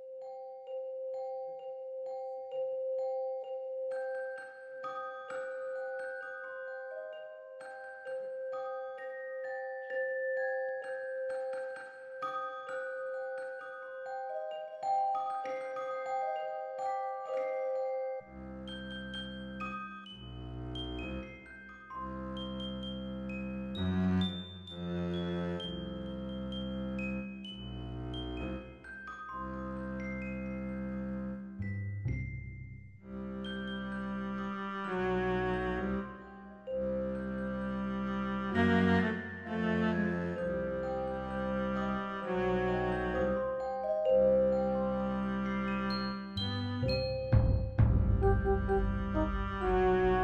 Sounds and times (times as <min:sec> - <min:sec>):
Glockenspiel: 0:00.0 - 0:50.2.